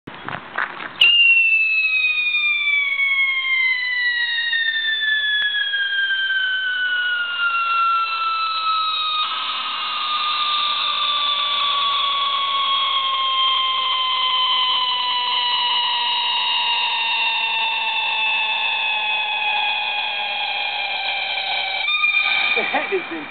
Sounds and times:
Fireworks: 0:00.3 - 0:23.3
Whistle: 0:01.0 - 0:23.3.

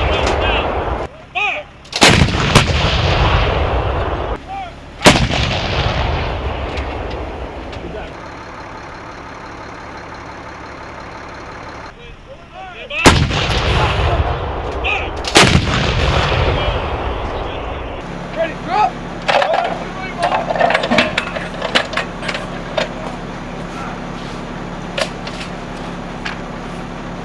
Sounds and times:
Speech: 0:00.0 - 0:01.7, 0:04.4 - 0:04.8, 0:11.9 - 0:13.1, 0:16.5 - 0:20.5, 0:22.9 - 0:24.1.

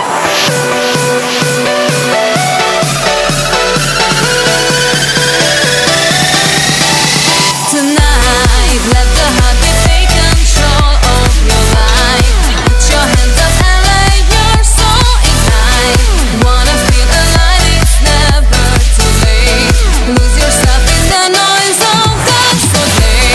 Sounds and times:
Music: 0:00.0 - 0:23.3.

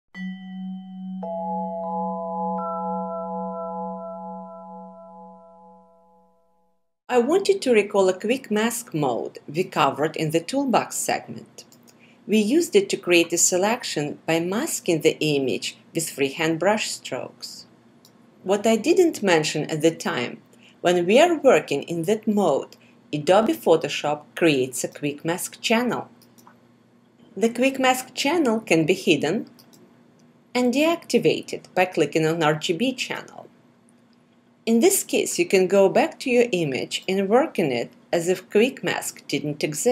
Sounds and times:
Music: 0:00.2 - 0:06.5
Speech: 0:07.1 - 0:11.6, 0:12.3 - 0:17.7, 0:18.5 - 0:26.1, 0:27.4 - 0:29.6, 0:30.6 - 0:33.5, 0:34.7 - 0:39.9.

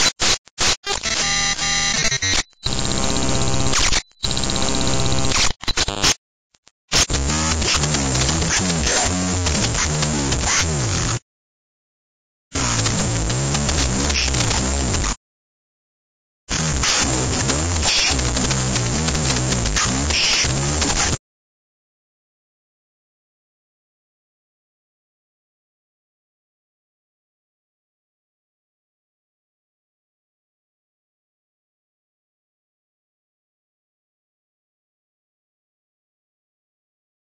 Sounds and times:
Music: 0:06.9 - 0:11.2, 0:12.6 - 0:15.2, 0:16.5 - 0:21.2.

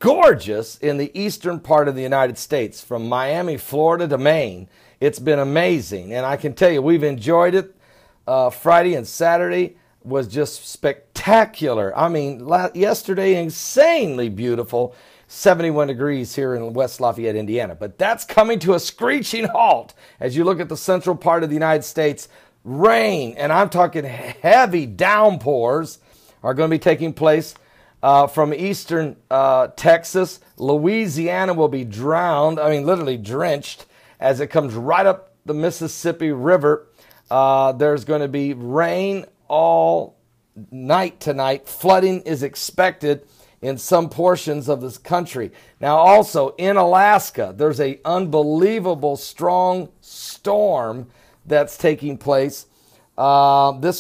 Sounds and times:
Speech: 0:00.0 - 0:07.7, 0:08.3 - 0:54.0.

